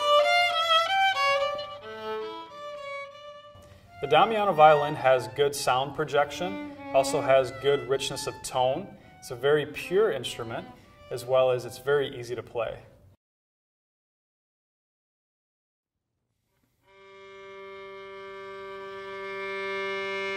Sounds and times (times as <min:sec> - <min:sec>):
Violin, fiddle: 0:00.0 - 0:12.2, 0:16.9 - 0:20.3
Speech: 0:04.0 - 0:13.0.